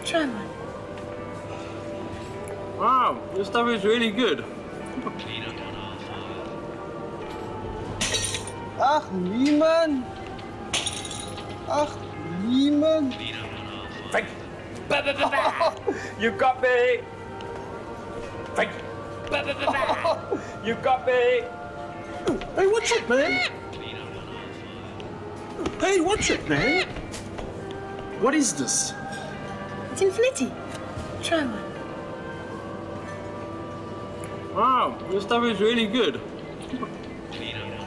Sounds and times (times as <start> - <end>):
Music: 0.0 - 37.8.